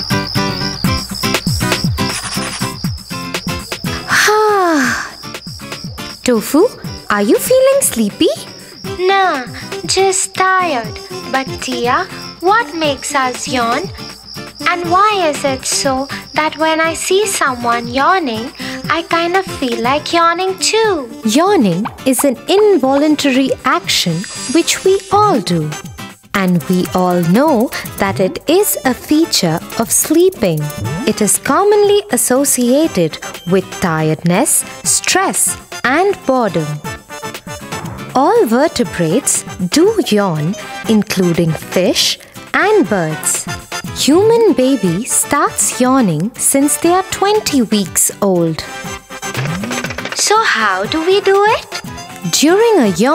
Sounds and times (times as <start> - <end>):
Speech: 6.2 - 13.9, 14.6 - 25.8, 26.4 - 36.8, 38.2 - 48.7, 50.2 - 53.1.